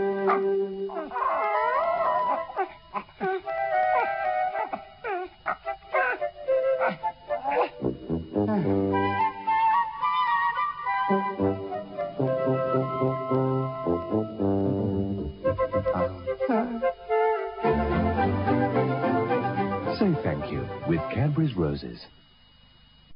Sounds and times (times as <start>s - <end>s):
Music: 0.0s - 2.6s, 3.3s - 21.8s
Speech: 19.9s - 22.2s.